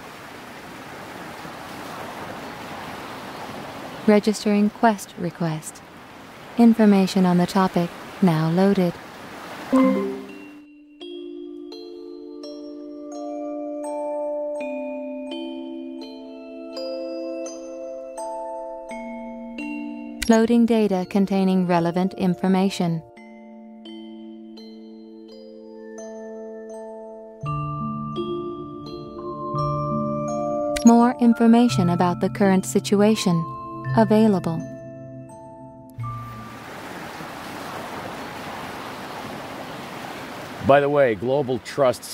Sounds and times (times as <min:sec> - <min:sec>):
Vibraphone: 0:09.7 - 0:36.5.